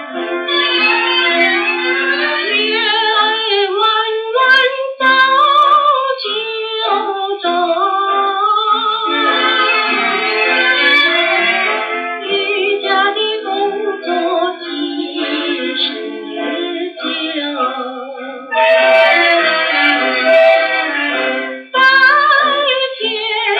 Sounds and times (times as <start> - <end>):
Music: 0.0 - 23.5.